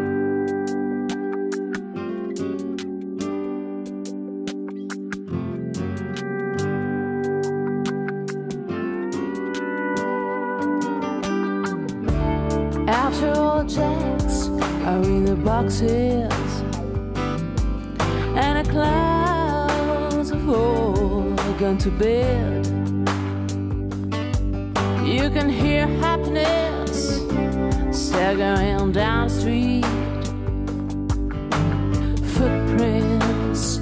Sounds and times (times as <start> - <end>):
Music: 0.0 - 33.8.